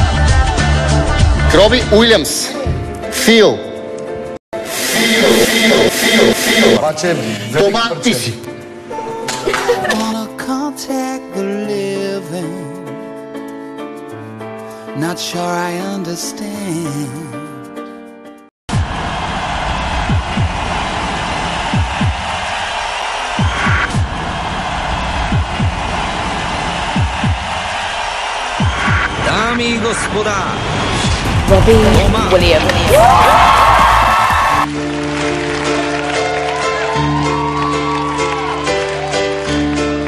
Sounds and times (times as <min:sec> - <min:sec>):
Music: 0:00.0 - 0:40.0.